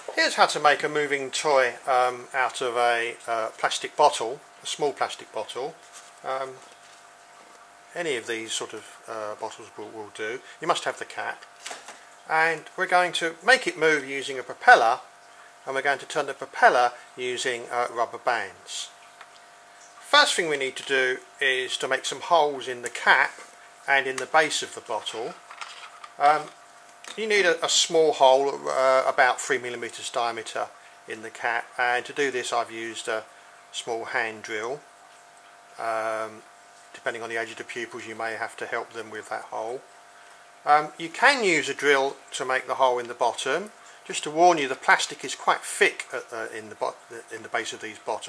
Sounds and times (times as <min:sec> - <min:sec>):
Speech: 0:00.1 - 0:06.6, 0:08.0 - 0:11.5, 0:12.3 - 0:15.1, 0:15.7 - 0:19.0, 0:20.1 - 0:25.4, 0:26.2 - 0:34.8, 0:35.8 - 0:39.9, 0:40.7 - 0:48.2.